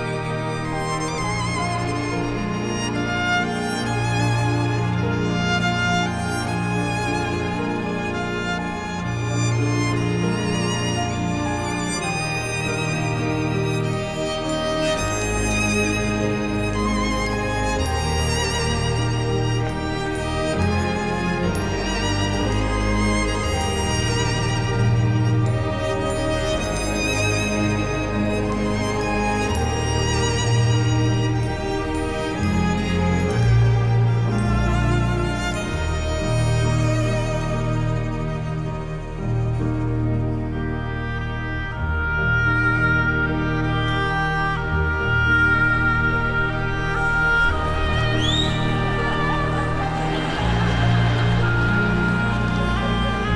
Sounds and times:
Music: 0.0 - 53.3.

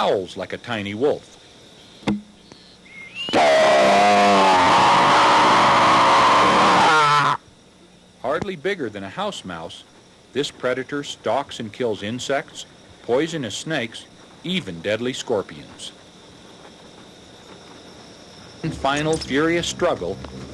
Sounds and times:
Speech: 0.0 - 1.2, 8.2 - 16.0, 18.6 - 20.2.

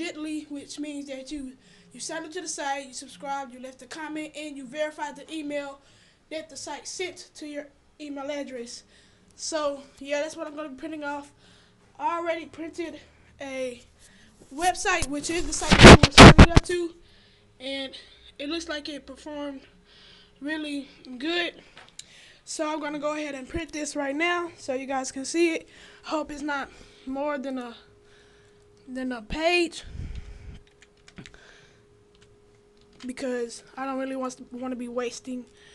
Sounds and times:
Speech: 0.0 - 8.8, 9.4 - 11.4, 12.0 - 13.9, 14.5 - 17.0, 17.6 - 19.7, 20.4 - 21.6, 22.5 - 27.9, 28.9 - 29.9, 33.0 - 35.5.

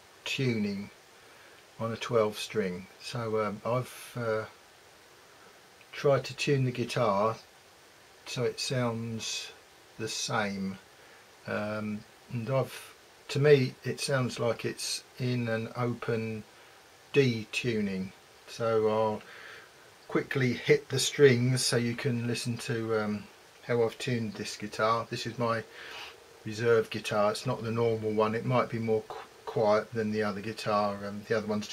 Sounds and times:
Speech: 0.2 - 1.0, 1.8 - 4.6, 5.9 - 7.5, 8.2 - 10.8, 11.4 - 16.5, 17.1 - 19.3, 20.1 - 25.7, 26.4 - 31.7.

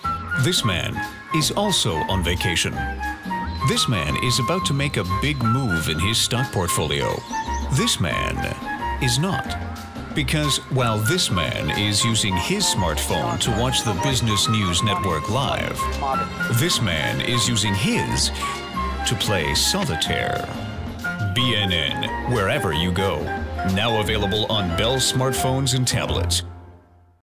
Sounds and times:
Music: 0.0 - 27.2
Speech: 0.4 - 2.8, 3.6 - 9.6, 10.2 - 18.4, 19.0 - 20.6, 21.4 - 26.5.

